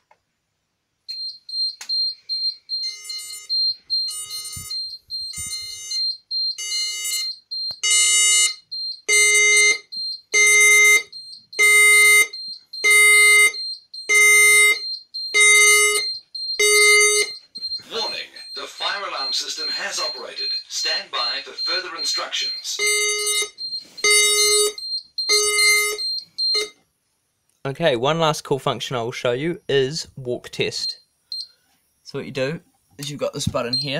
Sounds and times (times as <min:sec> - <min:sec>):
Fire alarm: 0:01.1 - 0:26.8, 0:29.4 - 0:31.6, 0:33.0 - 0:33.9.